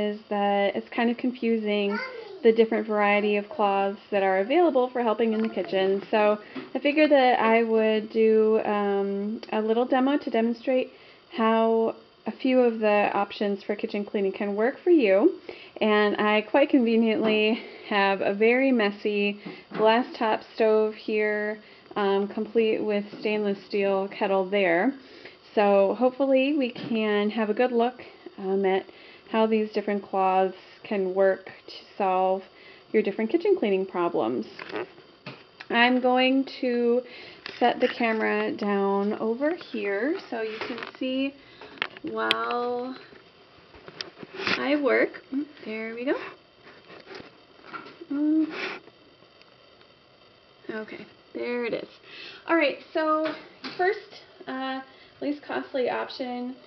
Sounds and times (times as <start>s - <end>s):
Speech: 0.0s - 32.4s, 33.0s - 34.6s, 35.7s - 41.4s, 42.0s - 43.1s, 44.6s - 46.4s, 50.7s - 56.6s.